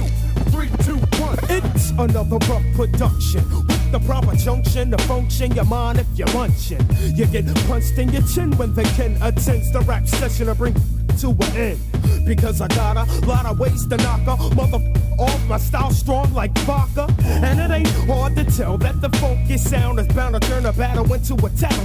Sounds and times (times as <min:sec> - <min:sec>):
Music: 0:00.0 - 0:21.8.